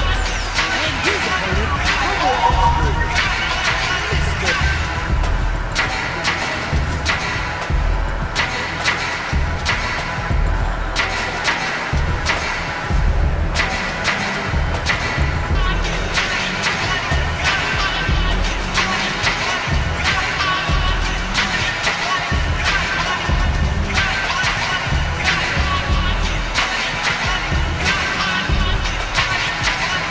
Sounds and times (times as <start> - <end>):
Music: 0.0 - 30.1.